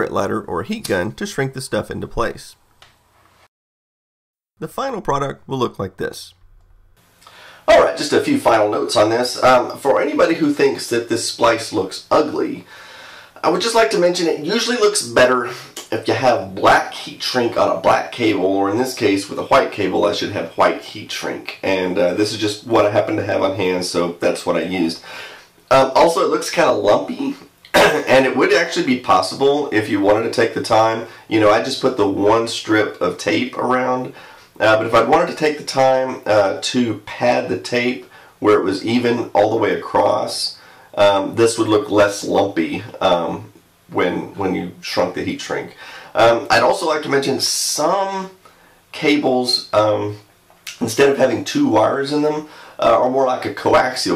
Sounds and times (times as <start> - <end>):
Speech: 0.0 - 2.6, 4.6 - 6.4, 7.7 - 12.7, 13.4 - 25.1, 25.7 - 54.1.